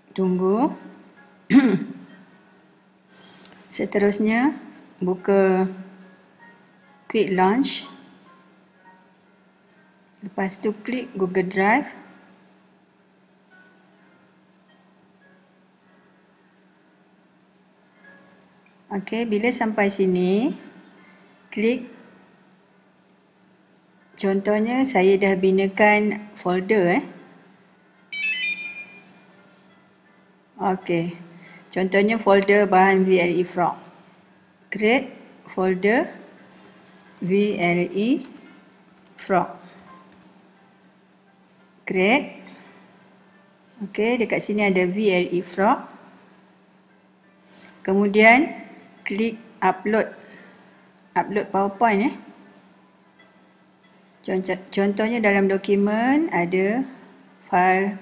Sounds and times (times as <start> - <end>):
Music: 0.0 - 58.0
Speech: 0.1 - 0.8, 3.8 - 5.8, 7.1 - 8.0, 10.2 - 12.1, 18.9 - 20.7, 21.5 - 21.9, 24.2 - 27.2, 30.6 - 31.2, 31.8 - 33.8, 34.8 - 36.2, 37.2 - 38.4, 39.2 - 39.5, 41.9 - 42.4, 43.8 - 45.9, 47.9 - 50.1, 51.2 - 52.3, 54.3 - 58.0.